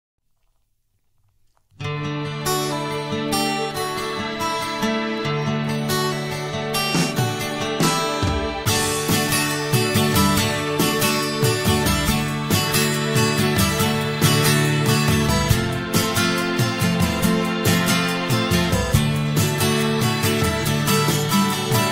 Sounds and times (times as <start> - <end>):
Music: 1.7 - 21.9.